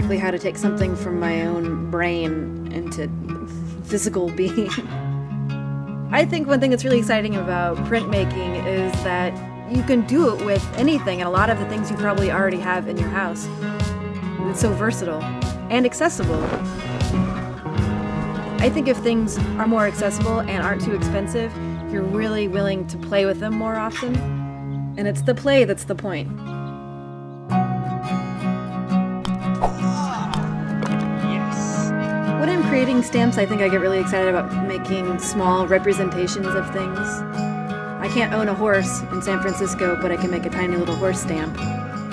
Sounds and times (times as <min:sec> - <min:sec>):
Speech: 0:00.0 - 0:03.1, 0:03.9 - 0:04.8, 0:06.1 - 0:13.4, 0:14.4 - 0:16.5, 0:18.6 - 0:24.2, 0:25.0 - 0:26.3, 0:31.3 - 0:37.2, 0:38.0 - 0:41.6
Music: 0:00.0 - 0:42.1.